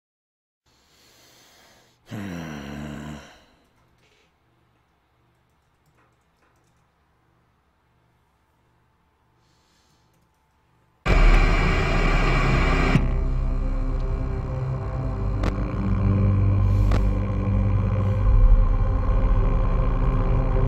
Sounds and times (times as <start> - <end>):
Inside, small room: 0.7 - 20.6
Music: 11.1 - 20.6.